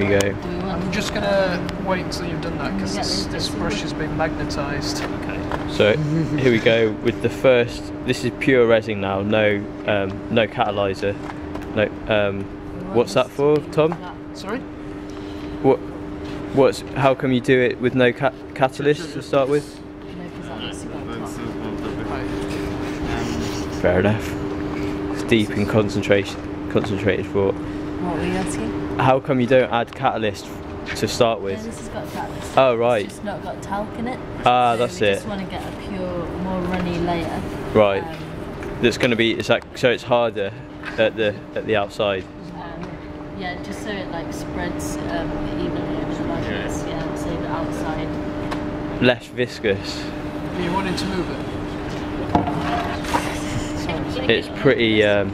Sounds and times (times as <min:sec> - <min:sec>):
Speech: 0:34.5 - 0:35.3.